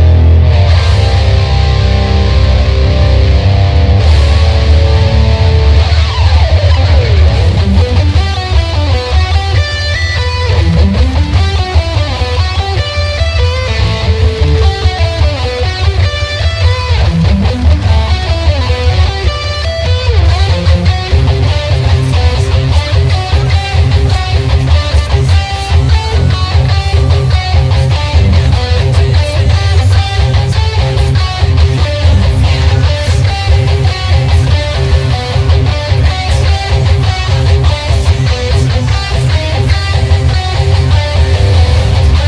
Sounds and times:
Electric guitar: 0.0 - 42.2
Strum: 0.0 - 42.2.

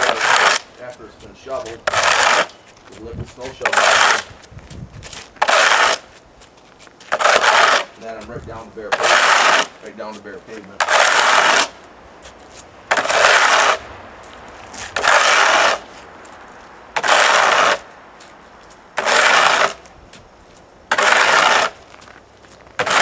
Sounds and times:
Speech: 0.8 - 1.9, 2.9 - 3.8, 8.0 - 9.0, 9.8 - 10.8.

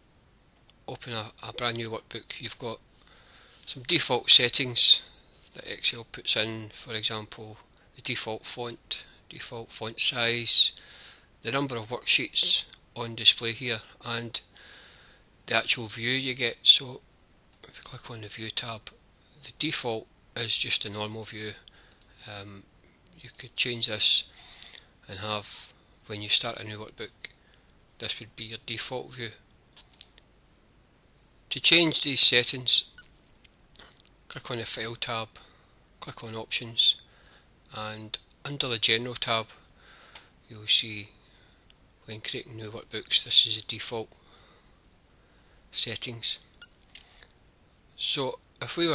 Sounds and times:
Speech: 0.9 - 2.8, 3.7 - 10.8, 11.4 - 14.5, 15.5 - 17.0, 17.6 - 24.3, 25.0 - 27.4, 28.0 - 29.4, 31.5 - 33.0, 34.3 - 37.0, 37.7 - 39.6, 40.5 - 41.2, 42.0 - 44.2, 45.8 - 46.5, 48.0 - 48.9.

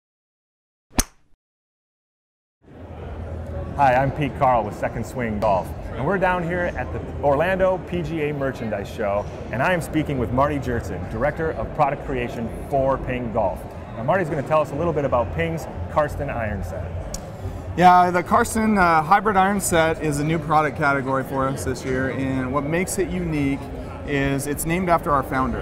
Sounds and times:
Speech: 3.7 - 16.9, 17.8 - 25.6.

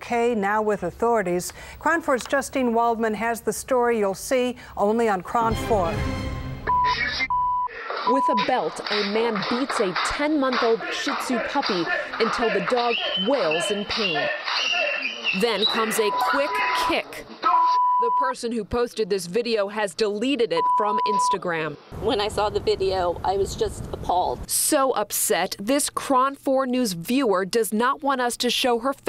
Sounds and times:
Music: 5.4 - 7.3
Speech: 8.1 - 14.4, 15.4 - 29.0.

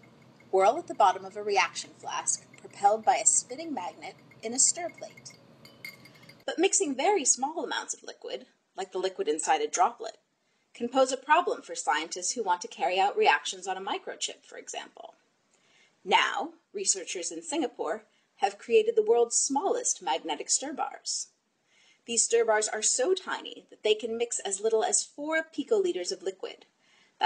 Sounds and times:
Speech: 0.6 - 5.3, 6.5 - 10.2, 10.8 - 15.2, 16.1 - 21.3, 22.1 - 26.6.

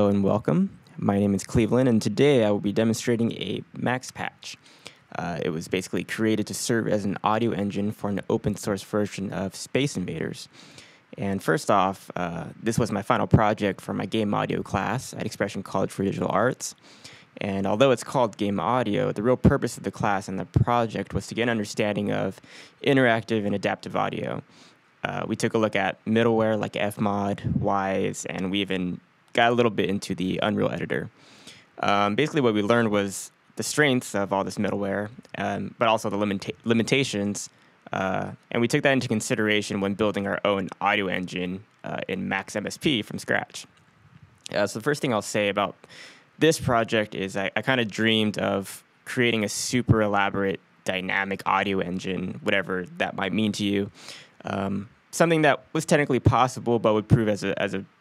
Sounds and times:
Speech: 0.0 - 31.2, 31.8 - 43.7, 44.5 - 58.0.

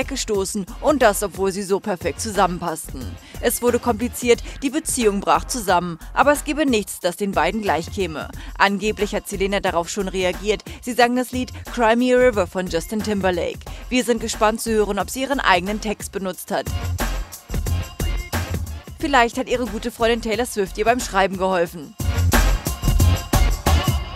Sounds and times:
Speech: 0.0 - 16.7, 19.0 - 22.0
Music: 0.0 - 24.1.

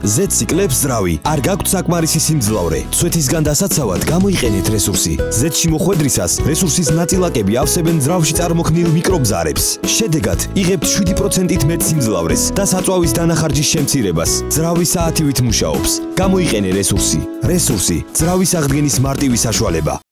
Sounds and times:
Music: 0.0 - 20.1
Speech: 0.0 - 20.1.

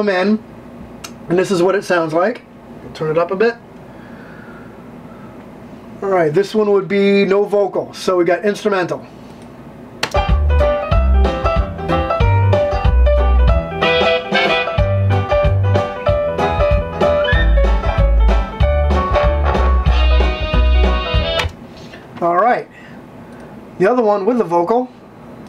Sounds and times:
Speech: 0.0 - 0.5, 1.3 - 3.6, 6.0 - 9.1, 22.2 - 22.7, 23.8 - 25.0
Musical instrument: 10.3 - 21.5.

